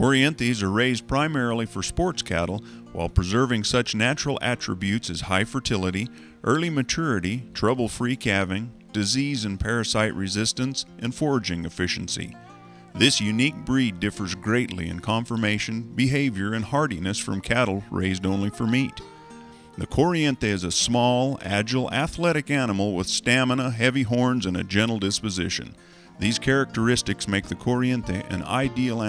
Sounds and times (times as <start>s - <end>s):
Speech: 0.0s - 12.4s, 13.0s - 19.0s, 19.8s - 29.0s
Music: 0.0s - 29.0s.